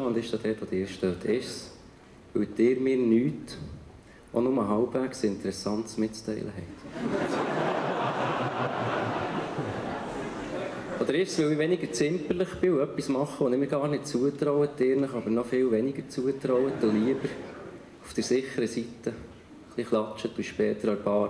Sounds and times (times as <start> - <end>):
Speech: 0.0 - 1.8, 2.4 - 3.8, 4.4 - 6.8, 10.5 - 17.4, 18.0 - 21.3.